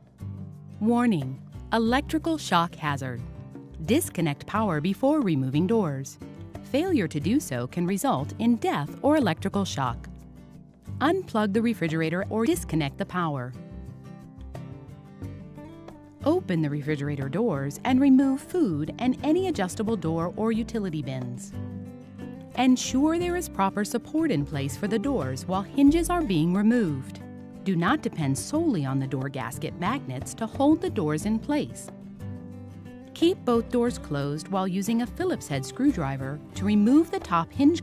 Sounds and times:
Music: 0.0s - 37.8s
Speech: 0.8s - 3.2s, 3.8s - 10.1s, 11.0s - 13.6s, 16.2s - 21.6s, 22.6s - 31.9s, 33.2s - 37.8s.

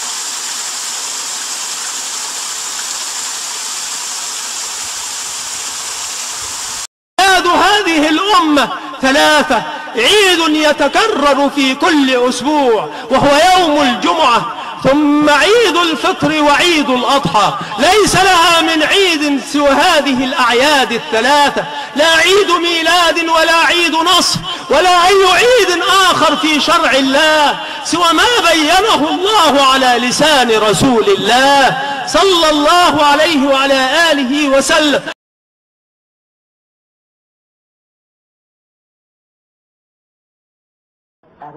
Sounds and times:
Speech: 7.2s - 35.2s, 41.2s - 41.5s.

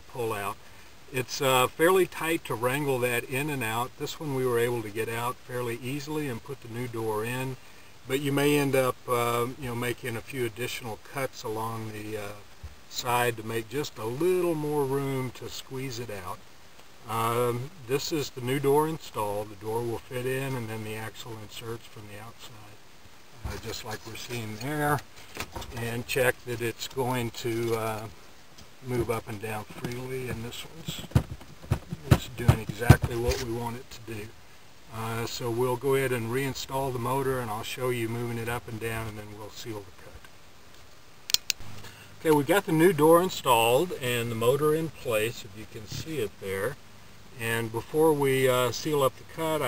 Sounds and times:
Speech: 0.0s - 16.4s, 17.0s - 22.8s, 23.4s - 25.0s, 25.6s - 28.2s, 28.8s - 31.1s, 31.9s - 40.3s, 42.2s - 49.6s.

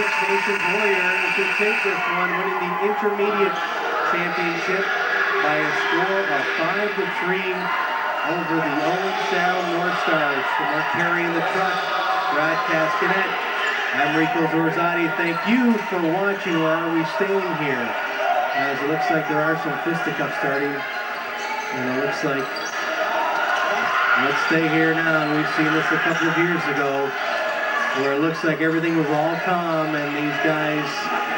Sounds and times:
Speech: 0.0s - 18.0s, 18.6s - 20.9s, 21.7s - 22.6s, 23.6s - 31.3s.

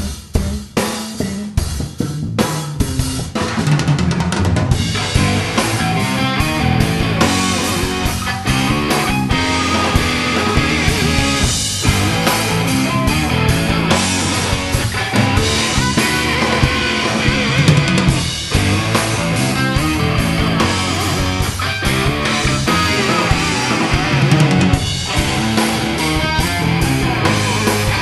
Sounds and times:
Guitar: 0.0s - 28.0s.

